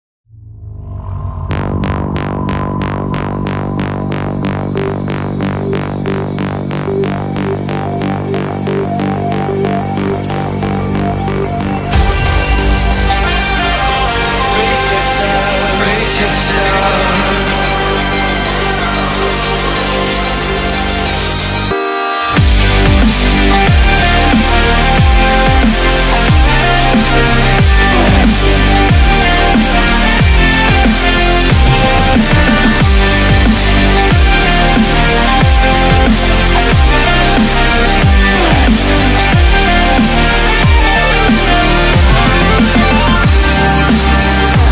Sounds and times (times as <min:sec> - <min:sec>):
Sound effect: 0:00.3 - 0:44.7
Music: 0:00.6 - 0:44.7.